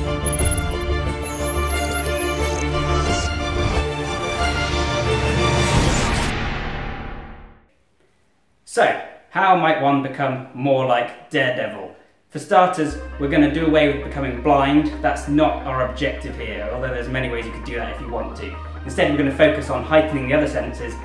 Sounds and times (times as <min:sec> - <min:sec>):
Music: 0:00.0 - 0:07.6, 0:12.7 - 0:21.0
Speech: 0:08.7 - 0:21.0.